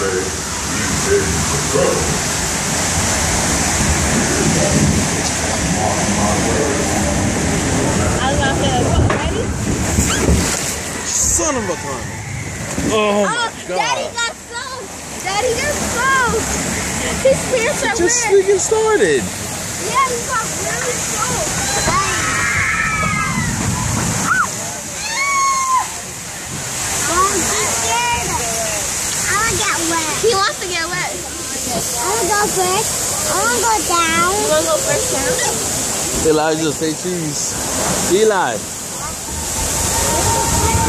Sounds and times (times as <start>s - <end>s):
Water: 0.0s - 40.8s.